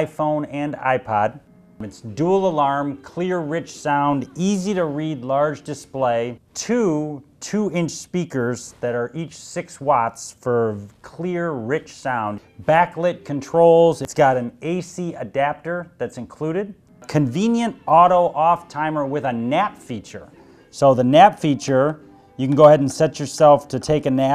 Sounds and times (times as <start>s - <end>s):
Speech: 0.0s - 24.3s.